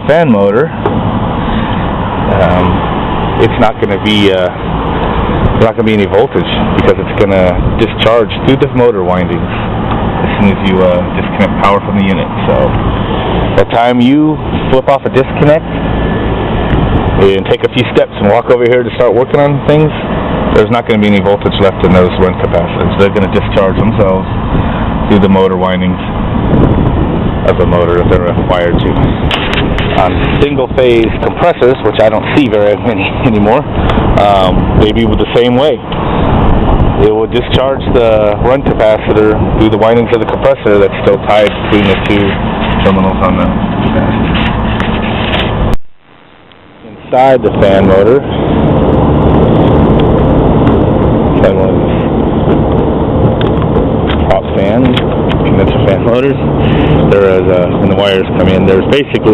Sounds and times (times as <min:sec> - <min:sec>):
Speech: 0:00.0 - 0:00.8, 0:02.2 - 0:02.8, 0:03.4 - 0:04.6, 0:05.6 - 0:09.5, 0:10.2 - 0:12.8, 0:13.6 - 0:15.7, 0:17.2 - 0:24.3, 0:25.0 - 0:26.1, 0:27.4 - 0:29.0, 0:29.9 - 0:35.9, 0:37.0 - 0:44.1, 0:46.8 - 0:48.3, 0:51.4 - 0:52.0, 0:54.2 - 0:59.3.